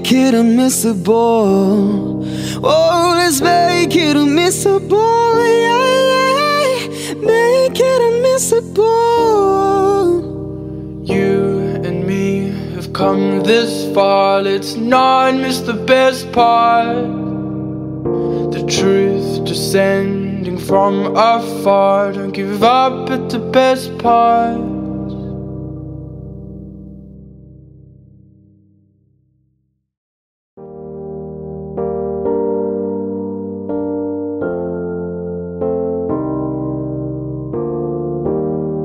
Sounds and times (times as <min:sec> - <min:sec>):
Music: 0:00.0 - 0:29.9, 0:30.6 - 0:38.8.